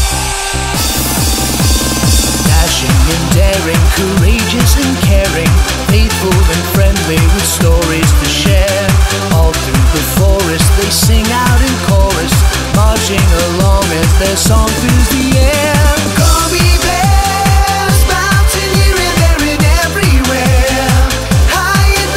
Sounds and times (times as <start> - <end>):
Techno: 0.0 - 22.1.